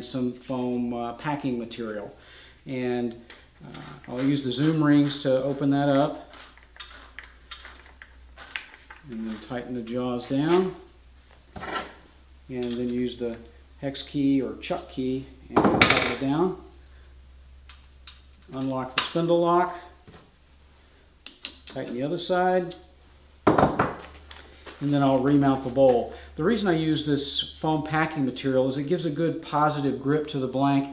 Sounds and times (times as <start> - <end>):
Speech: 0.0 - 6.2, 9.0 - 10.9, 12.5 - 16.7, 18.5 - 20.0, 21.7 - 22.8, 24.8 - 30.9.